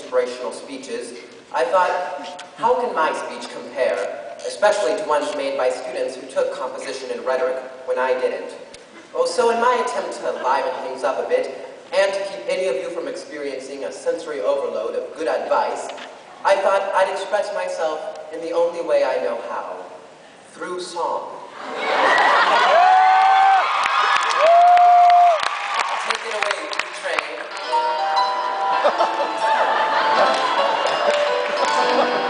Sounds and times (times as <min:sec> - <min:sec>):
Male speech, man speaking: 0:00.0 - 0:08.6, 0:09.2 - 0:19.9, 0:20.5 - 0:21.4, 0:26.0 - 0:27.5
Narration, monologue: 0:00.0 - 0:21.5.